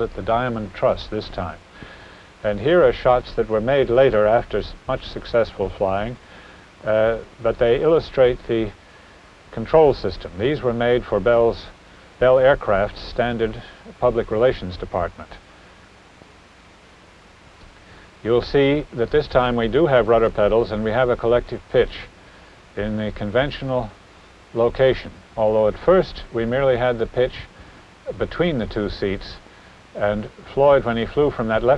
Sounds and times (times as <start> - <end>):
Speech: 0.0 - 1.6, 2.4 - 6.2, 6.8 - 8.8, 9.5 - 15.4, 18.2 - 22.1, 22.8 - 27.5, 28.1 - 29.4, 30.0 - 31.7.